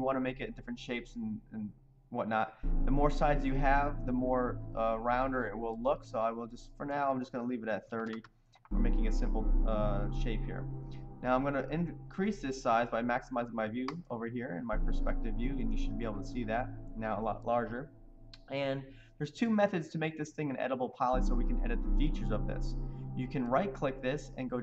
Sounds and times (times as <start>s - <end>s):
Speech: 0.0s - 10.6s, 11.2s - 24.6s
Music: 2.5s - 7.3s, 8.7s - 14.0s, 14.7s - 19.8s, 21.0s - 24.6s.